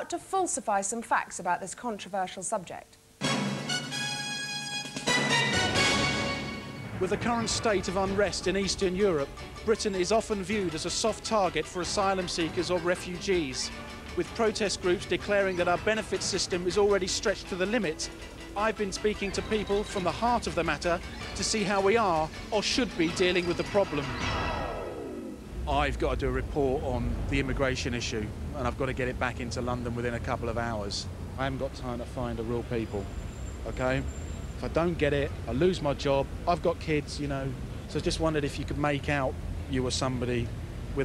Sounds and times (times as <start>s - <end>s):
Speech: 0.0s - 2.9s, 7.0s - 24.2s, 25.7s - 33.1s, 33.7s - 41.0s
Music: 3.2s - 25.2s.